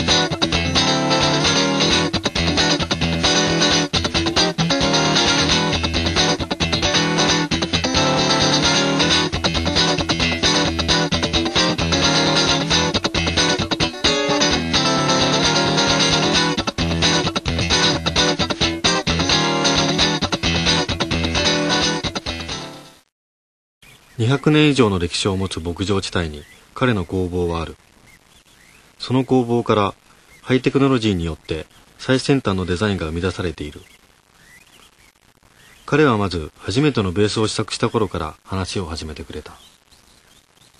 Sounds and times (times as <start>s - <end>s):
Electric guitar: 0.0s - 23.0s
Acoustic guitar: 0.0s - 23.1s.